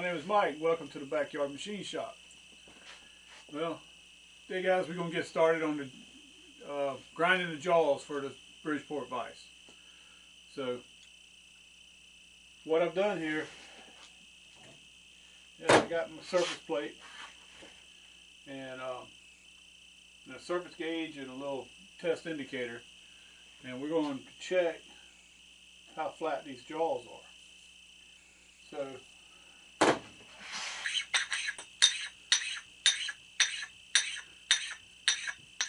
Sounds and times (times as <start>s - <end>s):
Tools: 31.0s - 35.6s.